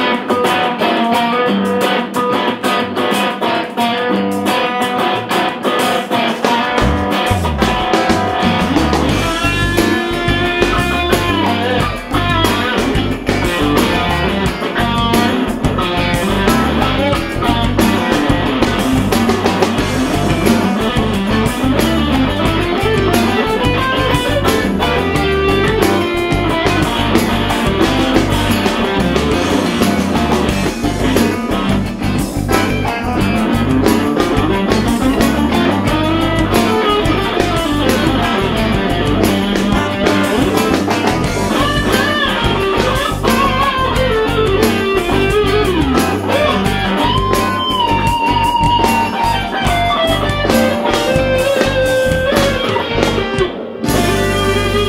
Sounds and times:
Electric guitar: 0:00.0 - 0:54.8.

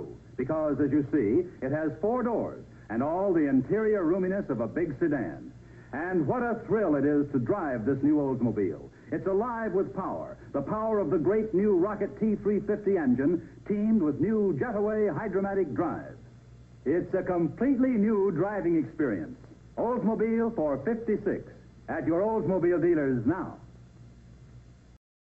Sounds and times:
Speech: 0:00.0 - 0:16.2, 0:16.8 - 0:23.7.

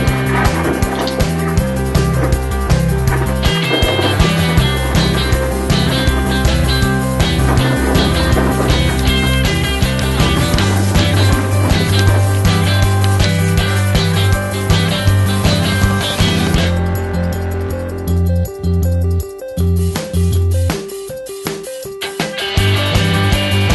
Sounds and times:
Music: 0:00.0 - 0:23.7.

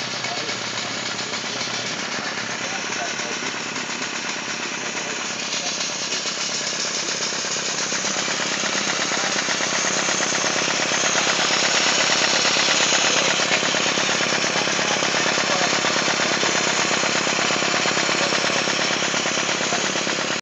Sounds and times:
Engine: 0:00.0 - 0:20.4
Speech: 0:00.1 - 0:03.6, 0:04.9 - 0:07.1, 0:08.0 - 0:11.3, 0:12.9 - 0:16.7, 0:17.7 - 0:20.2.

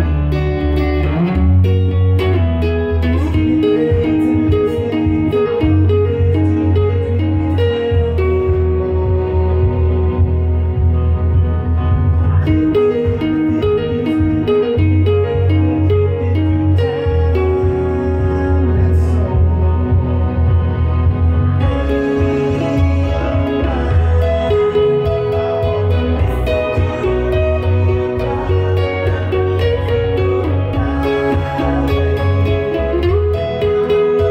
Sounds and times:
Acoustic guitar: 0:00.0 - 0:34.3
Strum: 0:00.0 - 0:34.3.

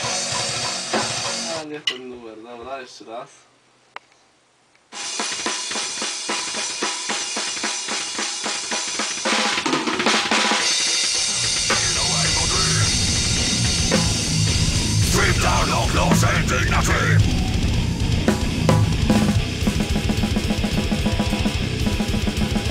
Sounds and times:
Drum kit: 0:00.0 - 0:01.7, 0:05.0 - 0:22.7
Speech: 0:01.5 - 0:03.5, 0:11.7 - 0:13.1, 0:15.0 - 0:17.2
Heavy metal: 0:11.0 - 0:22.7.

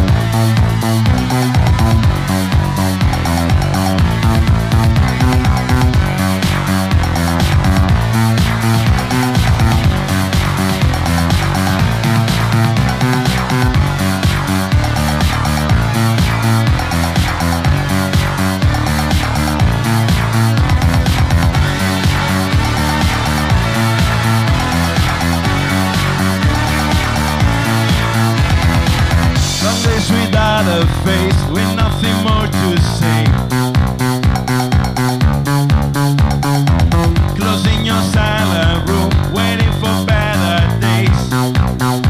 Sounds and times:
Music: 0:00.0 - 0:42.0.

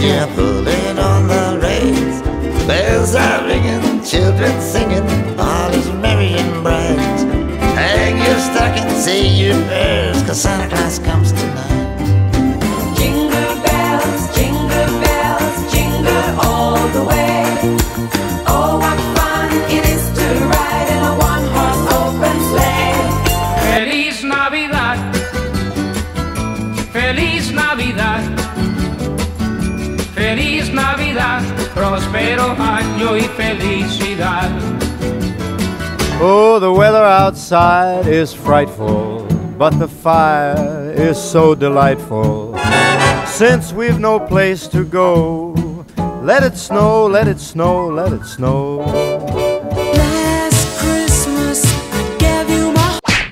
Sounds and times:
Wedding music: 0:12.4 - 0:23.8, 0:42.5 - 0:44.8.

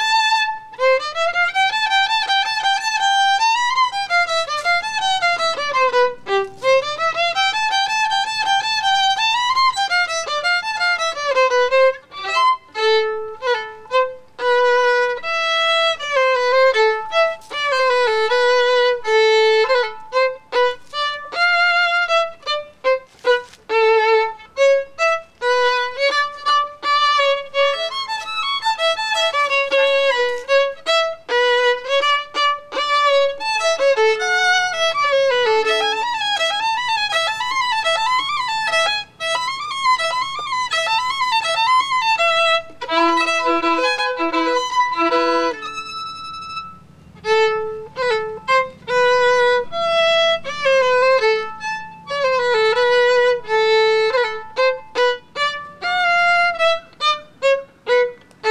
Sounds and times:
Violin, fiddle: 0:00.0 - 0:58.5.

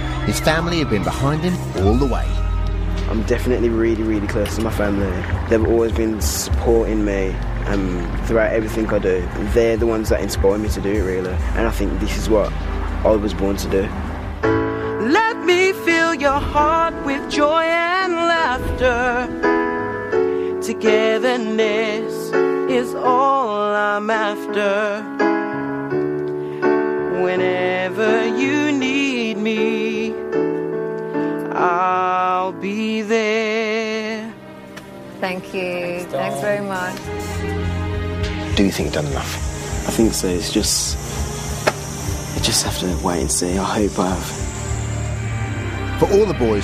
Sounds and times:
Electric piano: 0:00.0 - 0:34.4.

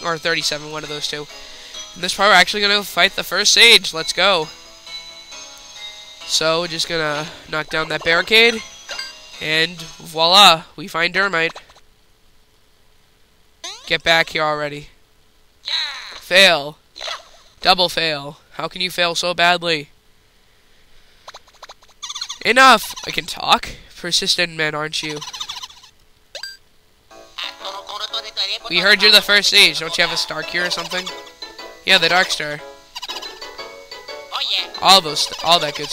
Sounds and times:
Music: 0:00.0 - 0:10.6, 0:27.1 - 0:35.9
Speech: 0:02.0 - 0:04.5, 0:06.3 - 0:08.6, 0:09.4 - 0:11.6, 0:13.9 - 0:15.0, 0:15.7 - 0:16.8, 0:17.6 - 0:19.9, 0:22.4 - 0:25.2, 0:27.4 - 0:31.1, 0:31.9 - 0:32.6, 0:34.4 - 0:35.9.

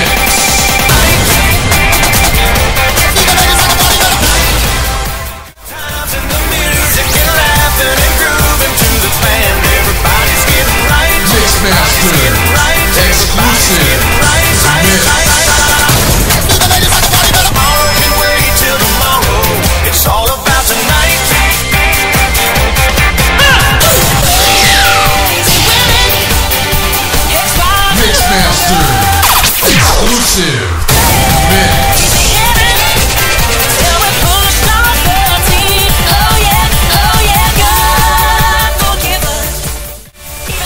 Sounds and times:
Exciting music: 0:00.0 - 0:40.6
Speech: 0:11.1 - 0:15.4, 0:27.6 - 0:30.8, 0:31.4 - 0:31.9.

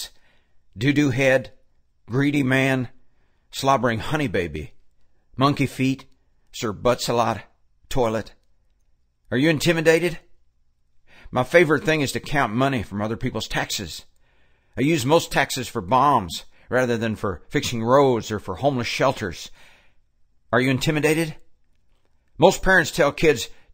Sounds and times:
Male speech, man speaking: 0:00.8 - 0:03.0, 0:03.6 - 0:04.8, 0:05.4 - 0:08.4, 0:09.3 - 0:10.3, 0:11.3 - 0:14.1, 0:14.8 - 0:19.6, 0:20.5 - 0:21.4, 0:22.4 - 0:23.6.

